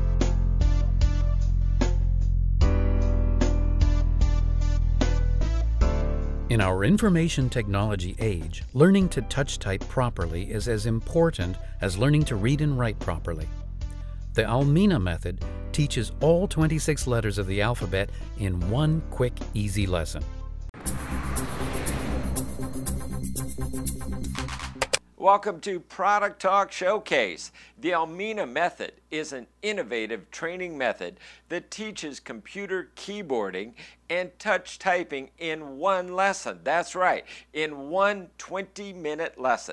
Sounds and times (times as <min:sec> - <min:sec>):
Music: 0:00.0 - 0:25.0
Speech: 0:06.5 - 0:13.5, 0:14.4 - 0:20.3, 0:25.2 - 0:39.7.